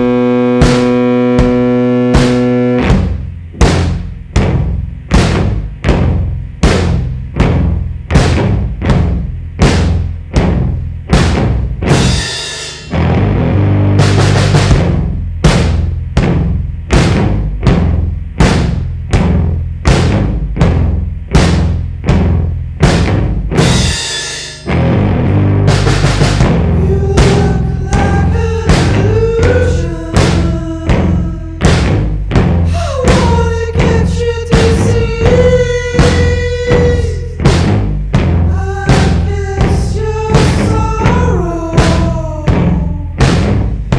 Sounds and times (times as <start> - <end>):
Bass drum: 0.0 - 43.9
Drum kit: 0.0 - 43.9.